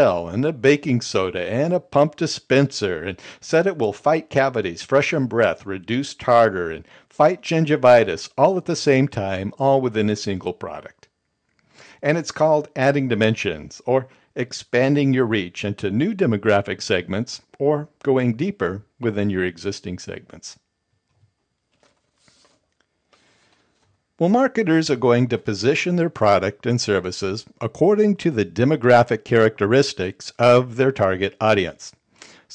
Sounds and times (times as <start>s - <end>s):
Speech: 0.0s - 11.1s, 12.0s - 20.6s, 24.2s - 32.5s.